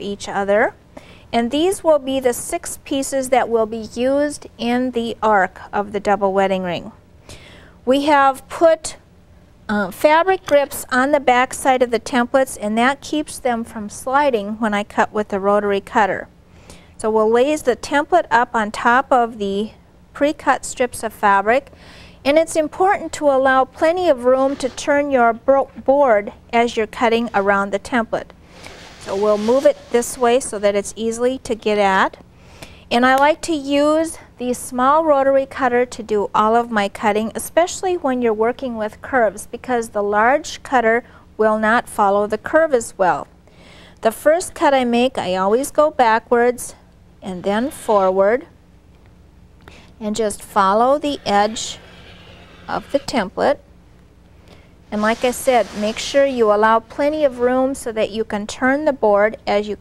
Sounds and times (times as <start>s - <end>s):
Speech: 0.0s - 7.0s, 7.9s - 9.0s, 9.7s - 16.3s, 17.0s - 21.7s, 22.3s - 28.3s, 29.0s - 32.2s, 32.9s - 43.3s, 44.0s - 48.5s, 50.0s - 51.8s, 52.7s - 53.6s, 54.9s - 59.8s
Inside, small room: 0.0s - 59.8s.